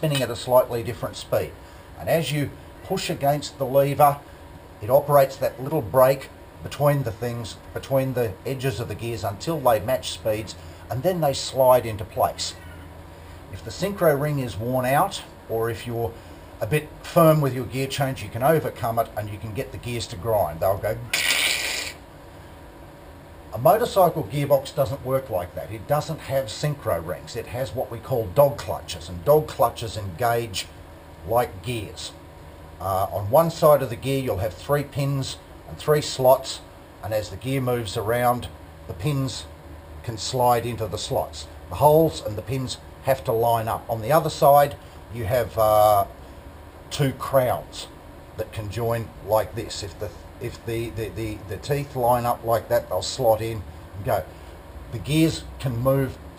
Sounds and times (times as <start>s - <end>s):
Speech: 0.0s - 4.2s, 4.8s - 12.7s, 13.5s - 21.1s, 23.5s - 32.2s, 32.8s - 46.2s, 46.9s - 54.3s, 54.9s - 56.2s.